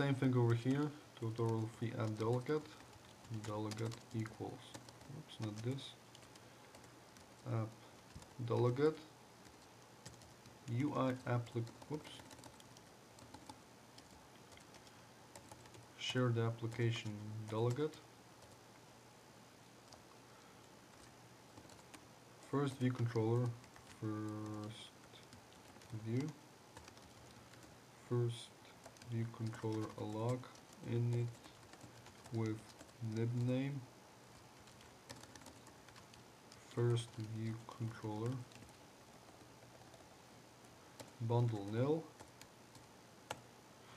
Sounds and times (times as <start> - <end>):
Speech: 0.0 - 6.0, 7.4 - 7.8, 8.4 - 9.1, 10.7 - 12.3, 16.0 - 18.1, 22.5 - 25.0, 25.9 - 26.4, 28.1 - 31.4, 32.3 - 33.9, 36.7 - 38.5, 41.2 - 42.1
Computer keyboard: 0.5 - 8.8, 9.4 - 15.8, 20.9 - 22.0, 22.7 - 27.7, 28.8 - 33.5, 34.6 - 40.0, 41.0 - 43.4.